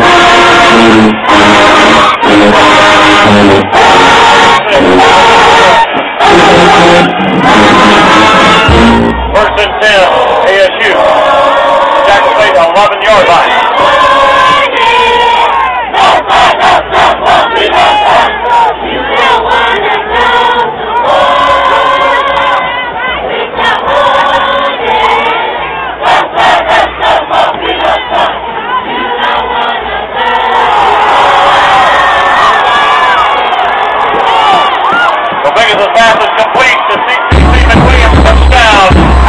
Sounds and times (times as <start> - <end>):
Music: 0.0 - 10.4, 13.6 - 35.4, 37.3 - 39.2
Outside, urban or manmade: 0.0 - 36.2
Inside, public space: 0.0 - 39.2
Speech: 9.4 - 11.2, 12.0 - 13.6, 35.4 - 39.0.